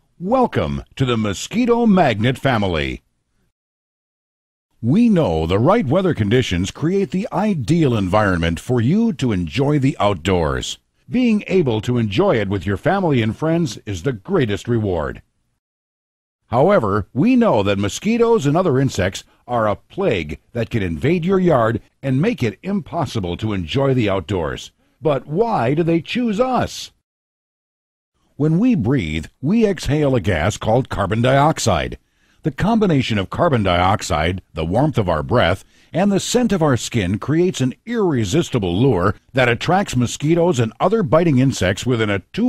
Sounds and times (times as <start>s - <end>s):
Speech: 0.2s - 3.0s, 4.8s - 15.2s, 16.5s - 27.0s, 28.4s - 42.4s.